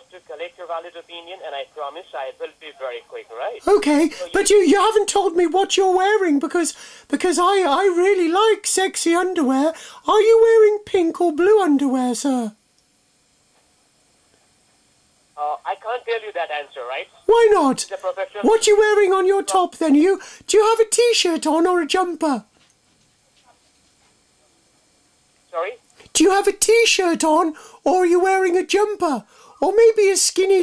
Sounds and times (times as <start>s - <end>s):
Speech: 25.6s - 30.6s.